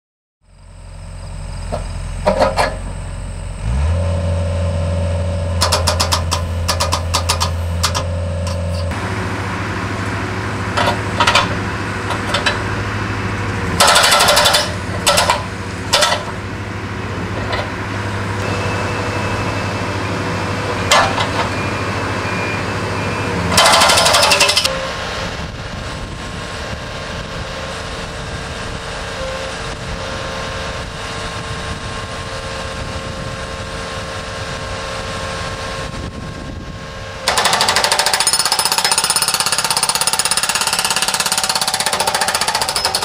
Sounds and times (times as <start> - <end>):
Vehicle: 0.4 - 43.0.